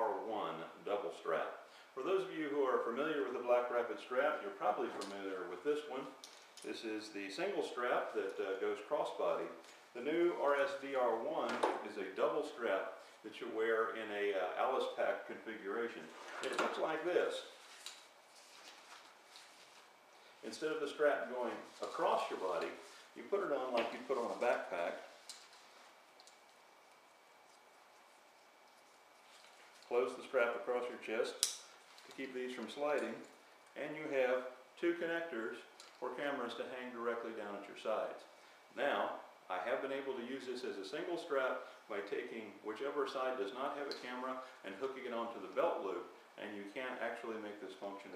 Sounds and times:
Speech: 0.0s - 17.5s, 20.4s - 25.1s, 29.9s - 31.4s, 32.1s - 48.1s.

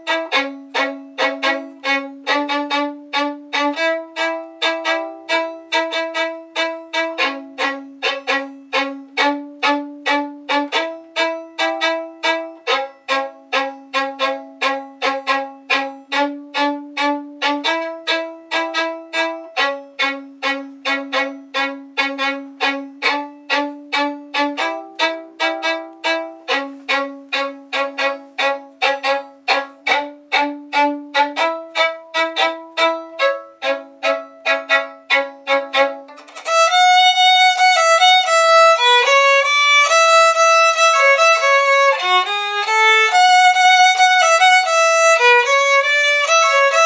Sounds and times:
Violin, fiddle: 0.0s - 46.8s.

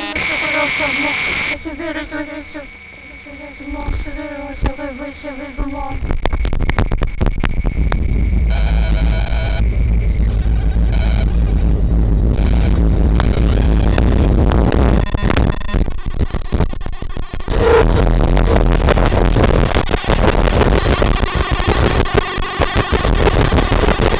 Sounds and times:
Electronica: 0.0s - 24.1s.

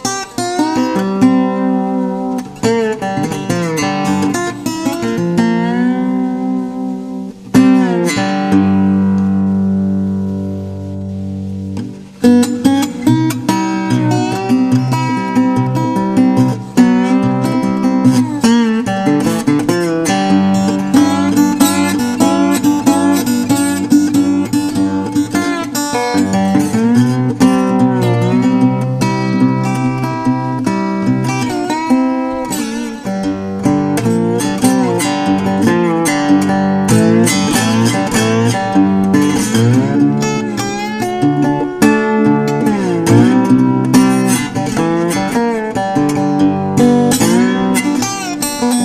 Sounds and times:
Acoustic guitar: 0.0s - 48.8s
Strum: 0.0s - 48.8s.

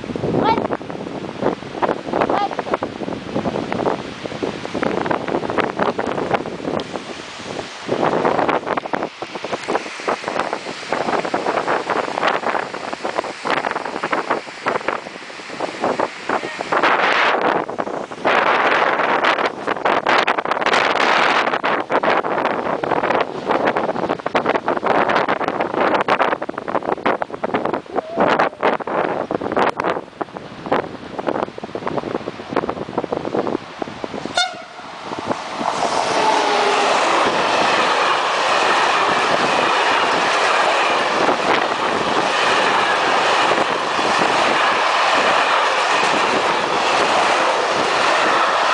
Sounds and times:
Speech: 0.4s - 0.7s, 2.3s - 2.6s, 16.4s - 16.7s.

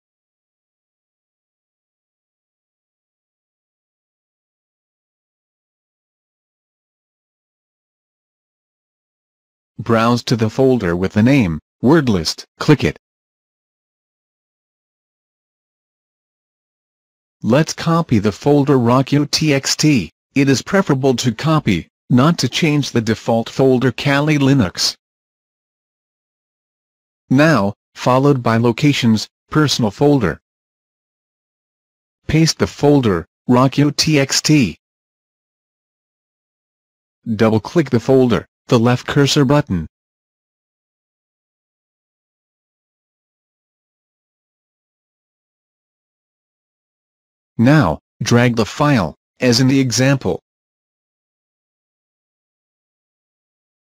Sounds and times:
Speech: 9.8s - 13.0s, 17.4s - 25.0s, 27.3s - 30.4s, 32.3s - 34.8s, 37.3s - 39.9s, 47.6s - 50.4s.

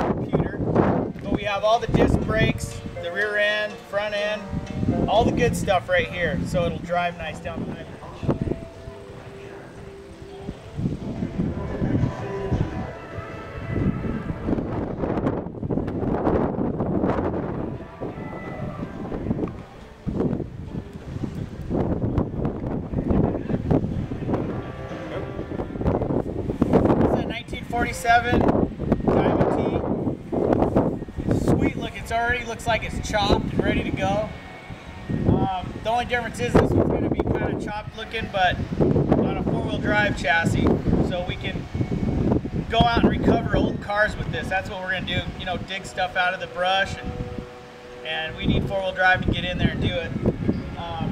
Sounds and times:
Music: 0.8s - 15.2s, 15.8s - 51.1s.

